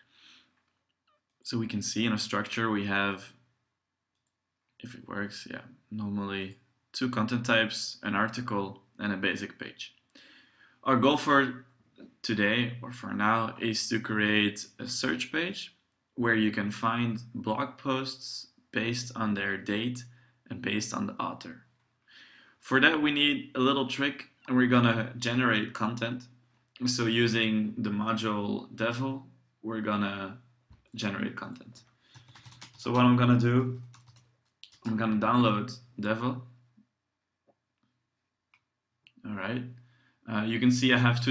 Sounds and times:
Speech: 1.4 - 3.4, 4.8 - 10.0, 10.8 - 21.7, 22.6 - 31.9, 32.8 - 33.9, 34.6 - 36.6, 39.2 - 41.3.

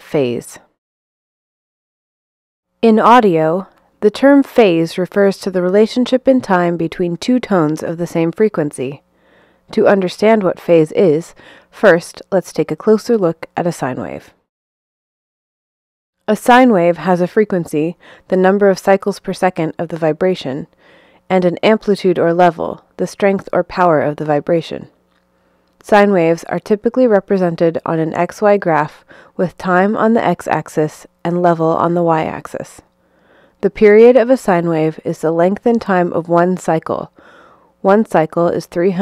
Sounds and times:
Speech: 0.0 - 0.7, 2.8 - 9.0, 9.7 - 14.4, 16.3 - 20.7, 21.3 - 24.9, 25.8 - 32.8, 33.6 - 37.1, 37.8 - 39.0.

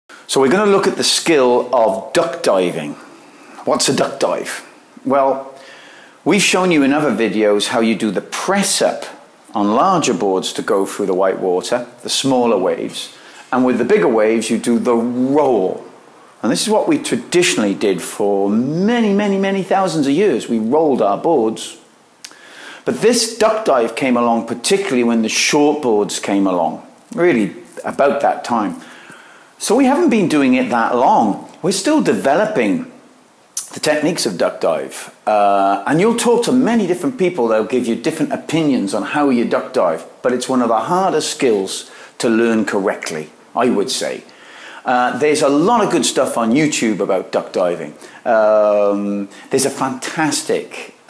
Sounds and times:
Speech: 0.3 - 3.0, 3.6 - 5.6, 6.2 - 21.9, 22.8 - 28.8, 29.6 - 33.0, 33.6 - 51.1.

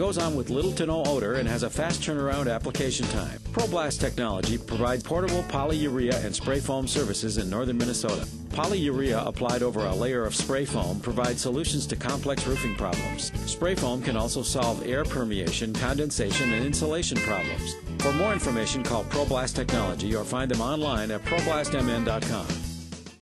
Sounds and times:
Speech: 0.0 - 22.6
Music: 0.0 - 23.2.

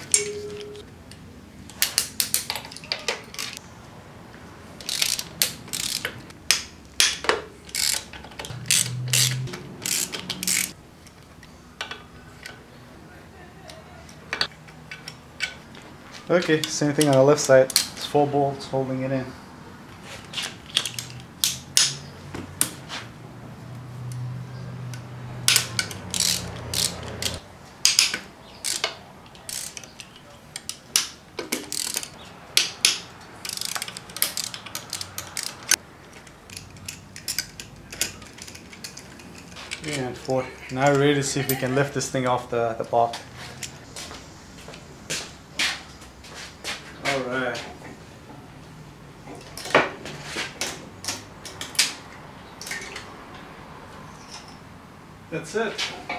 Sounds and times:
Speech: 16.3 - 19.4, 39.8 - 43.2, 47.0 - 47.8, 55.3 - 55.9.

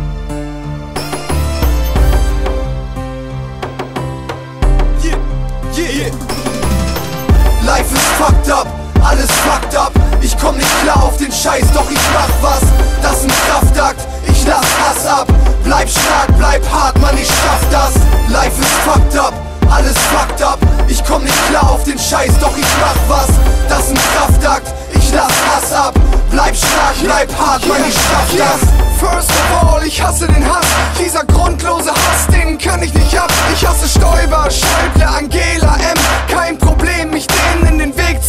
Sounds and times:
Soundtrack music: 0.0 - 38.2.

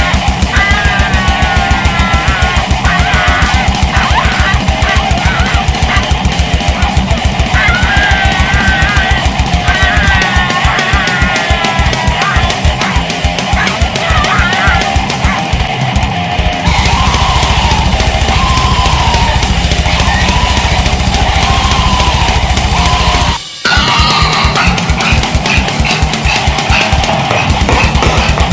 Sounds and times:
Music: 0.0 - 28.5
Animal: 22.8 - 28.5.

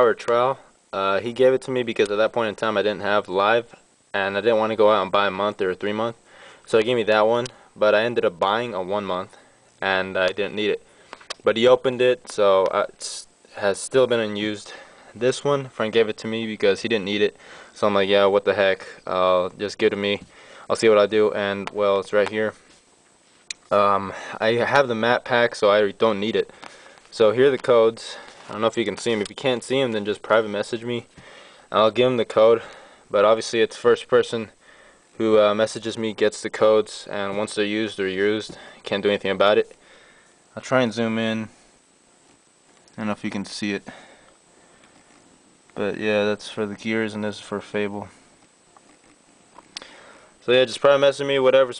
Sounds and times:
Speech: 0.0 - 22.6, 23.7 - 26.5, 27.1 - 31.1, 31.7 - 34.6, 35.2 - 39.8, 40.5 - 41.6, 42.9 - 44.0, 45.8 - 48.2, 50.4 - 51.7.

